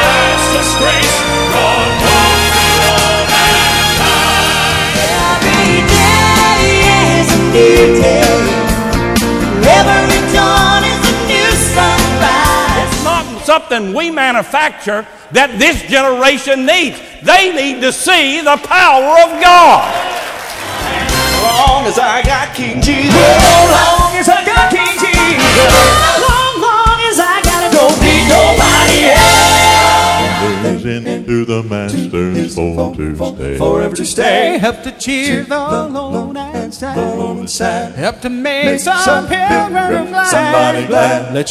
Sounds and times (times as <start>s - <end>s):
Music: 0.0s - 13.6s, 20.2s - 41.5s
Female singing: 9.6s - 13.0s, 25.7s - 29.0s
Speech: 13.1s - 19.9s.